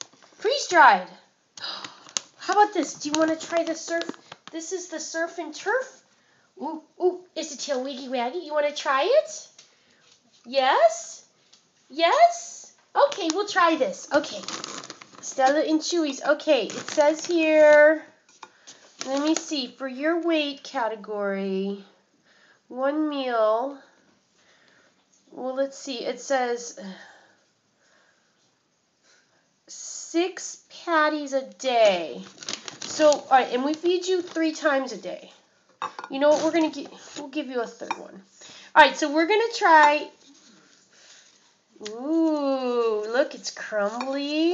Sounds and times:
Speech: 0.4s - 1.3s, 2.4s - 6.0s, 6.6s - 9.6s, 10.5s - 11.3s, 11.9s - 14.5s, 15.2s - 18.2s, 19.0s - 22.0s, 22.7s - 24.0s, 25.3s - 27.1s, 29.7s - 32.3s, 32.9s - 35.4s, 36.1s - 40.2s, 41.8s - 44.5s.

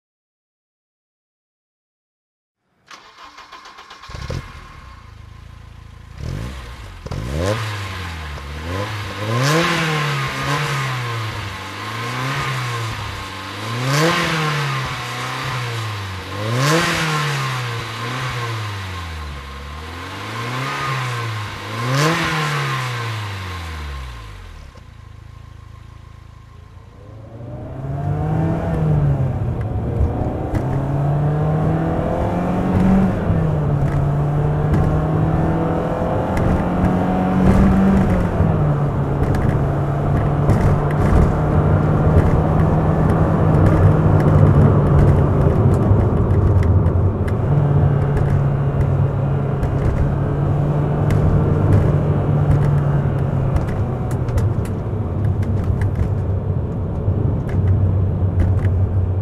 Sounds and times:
Car: 2.6s - 59.2s
Engine: 2.6s - 59.2s.

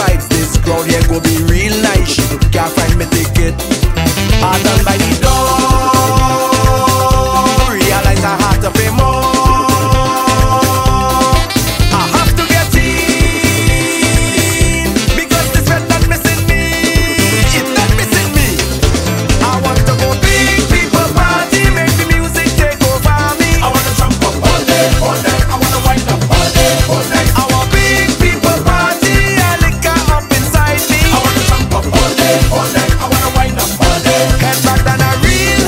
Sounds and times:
Dance music: 0.0s - 35.6s.

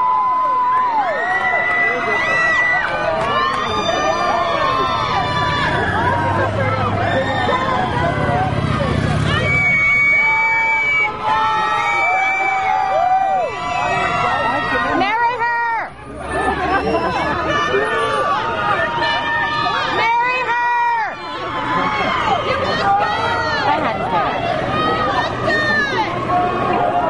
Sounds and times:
Hubbub, speech noise, speech babble: 0.0s - 27.0s
Outside, urban or manmade: 0.0s - 27.0s.

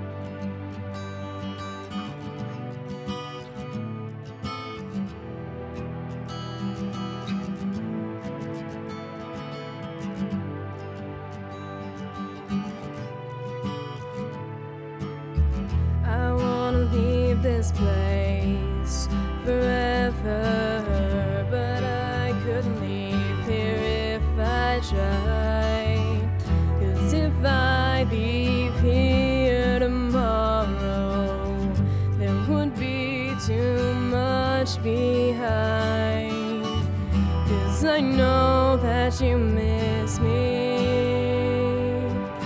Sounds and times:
Sad music: 0.0s - 42.4s.

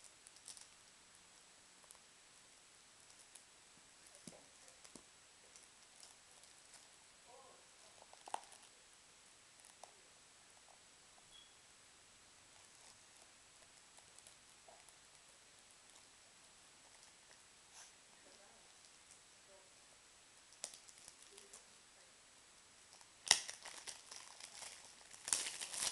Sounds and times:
Silence: 0.0s - 23.2s
Inside, small room: 0.0s - 25.9s.

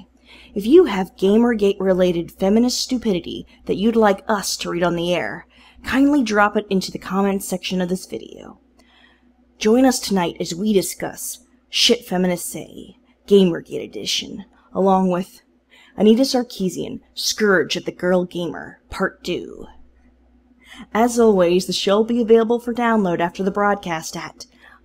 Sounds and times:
Speech: 0.0s - 8.6s, 9.6s - 15.4s, 16.0s - 19.8s, 20.8s - 24.8s.

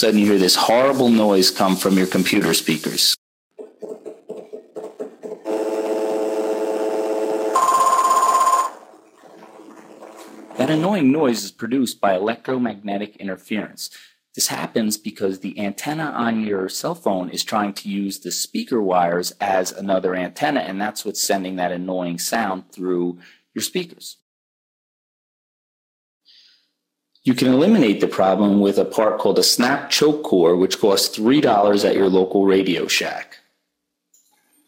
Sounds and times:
Speech: 0.0s - 3.2s, 10.6s - 24.2s, 27.2s - 33.5s.

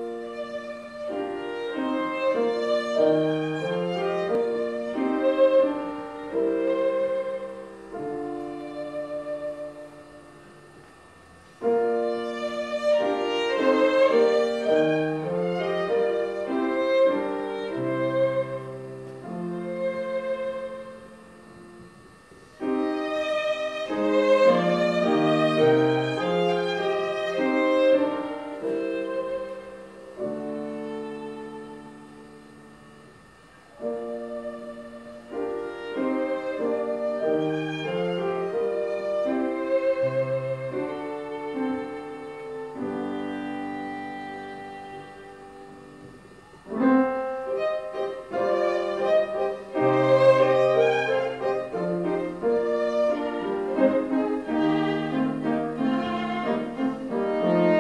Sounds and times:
Violin, fiddle: 0.0s - 10.5s, 11.6s - 21.9s, 22.6s - 32.4s, 33.7s - 57.8s.

